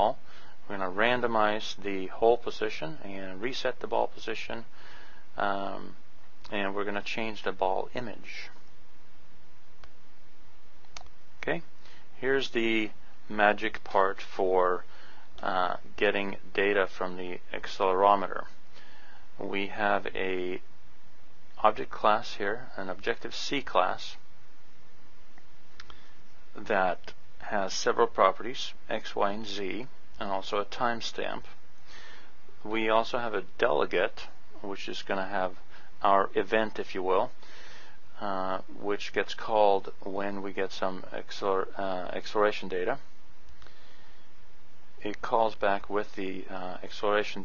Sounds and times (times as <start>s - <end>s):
Speech: 0.0s - 4.7s, 5.4s - 8.6s, 11.4s - 18.6s, 19.4s - 20.7s, 21.6s - 24.2s, 26.6s - 31.6s, 32.6s - 37.4s, 38.2s - 43.0s, 45.0s - 47.4s.